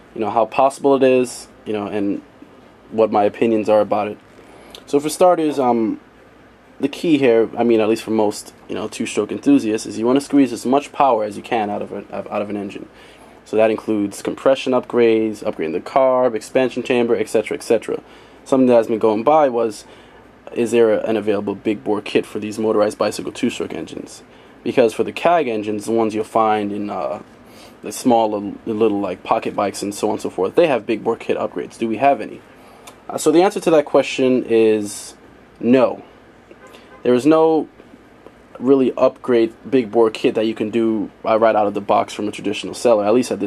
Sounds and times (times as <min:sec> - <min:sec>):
Speech: 0:00.0 - 0:02.3, 0:02.9 - 0:04.2, 0:04.8 - 0:06.0, 0:06.8 - 0:36.1, 0:37.0 - 0:37.8, 0:38.5 - 0:43.4.